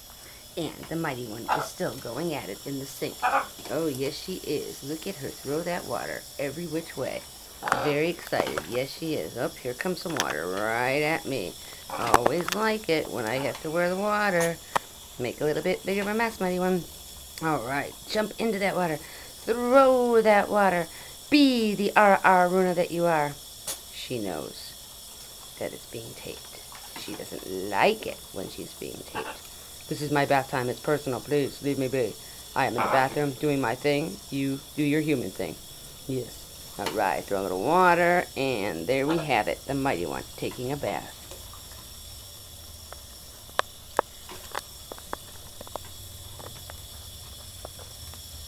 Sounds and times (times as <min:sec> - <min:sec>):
Speech: 0:00.6 - 0:14.6, 0:15.2 - 0:23.4, 0:24.0 - 0:24.8, 0:25.6 - 0:41.2.